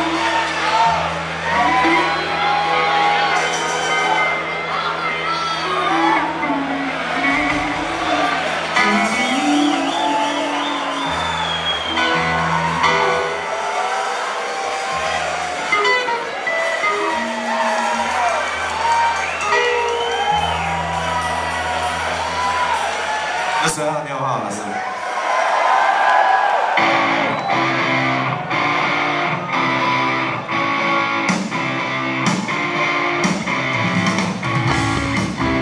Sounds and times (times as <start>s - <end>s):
Music: 0.0s - 24.5s, 26.6s - 35.6s
Crowd: 0.0s - 35.6s.